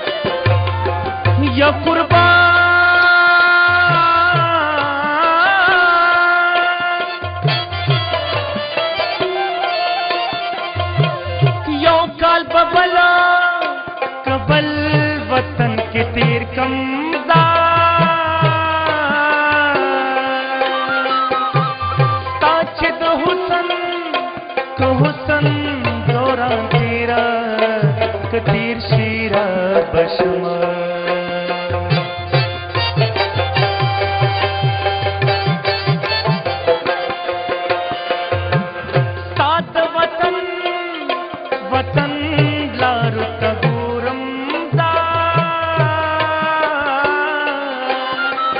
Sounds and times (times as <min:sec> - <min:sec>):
Inside, large room or hall: 0:00.0 - 0:48.5
Middle Eastern music: 0:00.0 - 0:48.5.